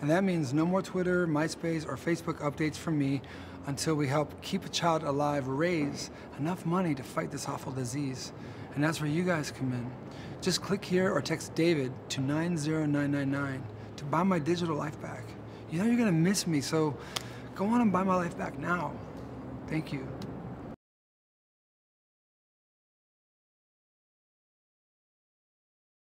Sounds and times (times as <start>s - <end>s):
Speech: 0.0s - 17.0s, 17.6s - 19.0s, 19.7s - 20.2s.